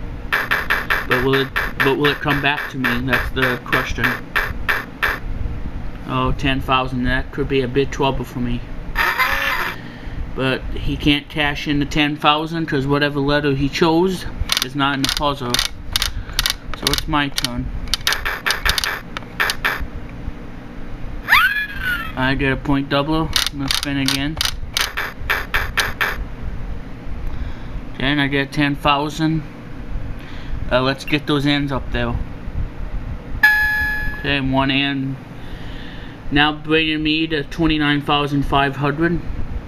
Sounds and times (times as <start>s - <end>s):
Speech: 1.1s - 4.2s, 6.0s - 8.7s, 10.4s - 15.6s, 16.8s - 17.7s, 22.2s - 24.4s, 28.0s - 29.5s, 30.7s - 32.2s, 34.3s - 35.2s, 36.3s - 39.3s.